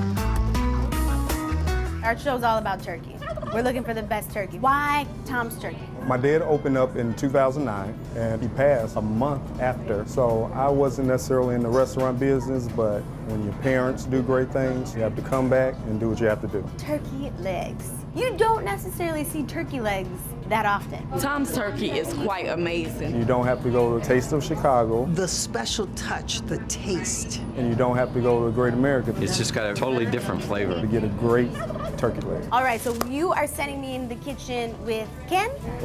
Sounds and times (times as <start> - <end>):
Music: 0.0 - 25.0, 27.4 - 35.8.